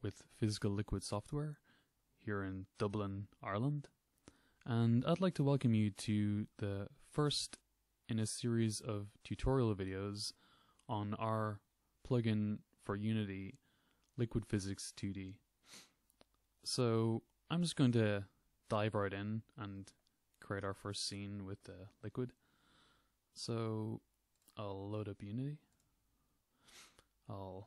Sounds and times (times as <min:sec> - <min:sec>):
Speech: 0:00.0 - 0:01.6, 0:02.2 - 0:04.0, 0:04.6 - 0:13.6, 0:14.2 - 0:15.4, 0:16.6 - 0:22.4, 0:23.3 - 0:25.7, 0:27.2 - 0:27.6.